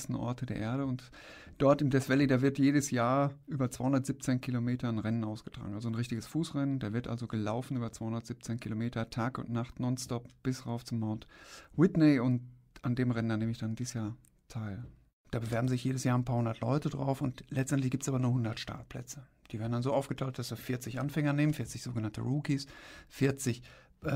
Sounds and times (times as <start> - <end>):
Speech: 0.0 - 24.1.